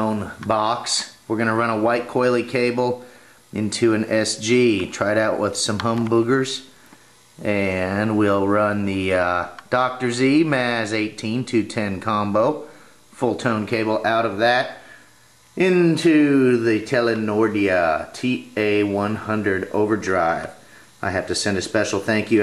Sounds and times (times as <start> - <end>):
Speech: 0.0 - 6.7, 7.4 - 14.8, 15.6 - 22.4.